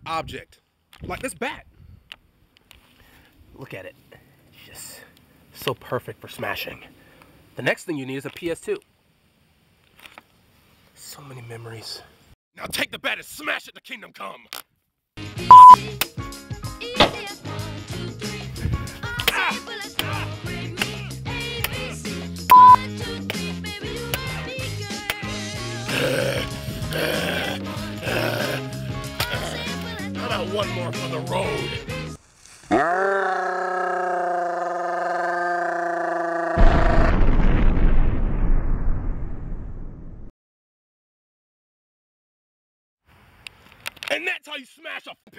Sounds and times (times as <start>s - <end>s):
Speech: 0.0s - 1.6s, 3.6s - 4.0s, 4.6s - 6.9s, 7.6s - 8.8s, 11.0s - 14.5s, 30.2s - 31.7s, 44.1s - 45.3s
Music: 15.2s - 32.2s.